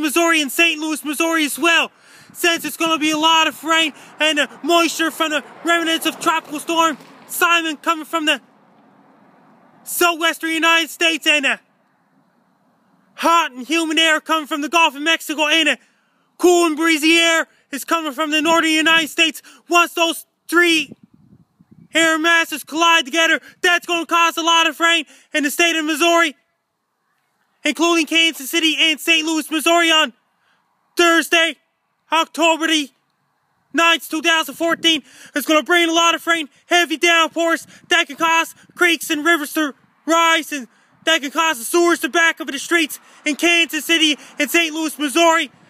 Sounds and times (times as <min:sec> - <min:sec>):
Speech: 0:00.0 - 0:08.4, 0:09.9 - 0:11.6, 0:13.2 - 0:15.8, 0:16.4 - 0:20.9, 0:22.0 - 0:26.4, 0:27.6 - 0:30.1, 0:31.0 - 0:32.9, 0:33.8 - 0:45.5.